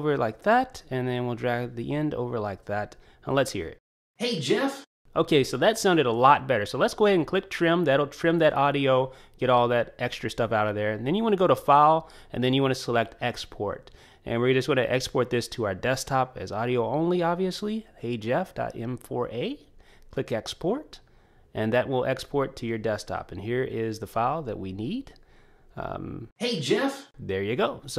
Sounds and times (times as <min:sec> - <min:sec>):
Speech: 0:00.0 - 0:21.0, 0:21.6 - 0:25.2, 0:25.8 - 0:27.9
Inside, small room: 0:00.0 - 0:27.9.